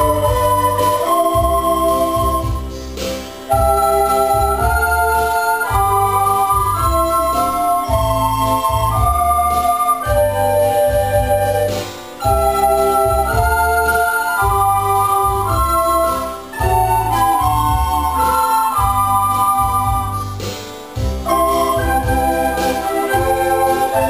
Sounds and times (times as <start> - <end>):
Theme music: 0.0 - 24.0.